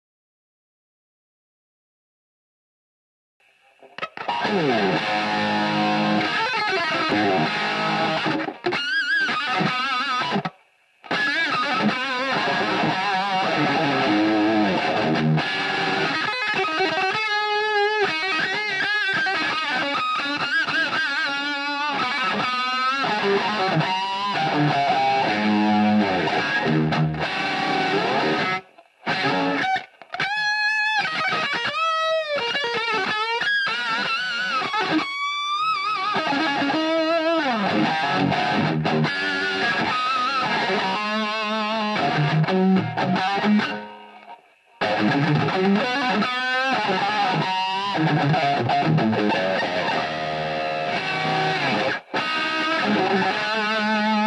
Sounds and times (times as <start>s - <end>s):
Music: 3.8s - 54.2s.